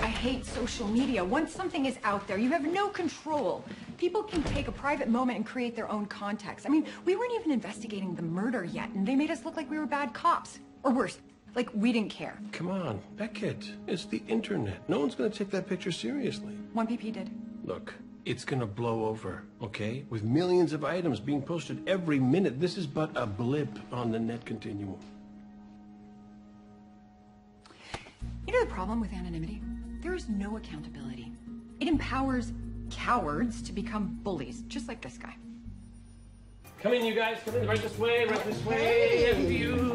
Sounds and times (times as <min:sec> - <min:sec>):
Music: 0:00.0 - 0:39.9.